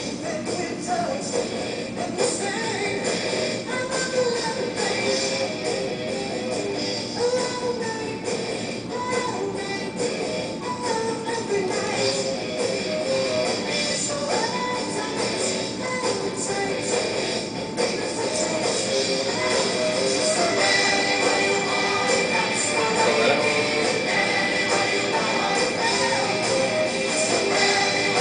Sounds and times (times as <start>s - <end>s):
Music: 0.0s - 28.2s.